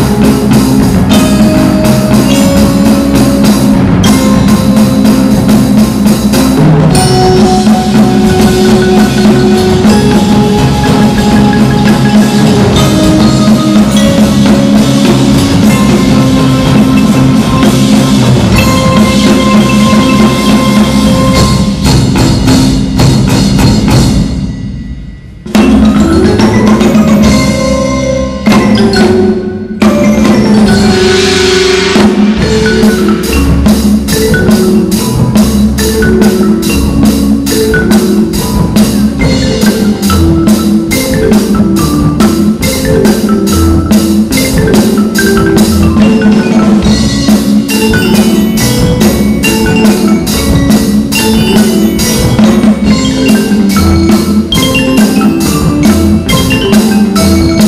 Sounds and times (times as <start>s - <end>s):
Glockenspiel: 0.0s - 57.6s
Marimba, xylophone: 0.0s - 57.6s.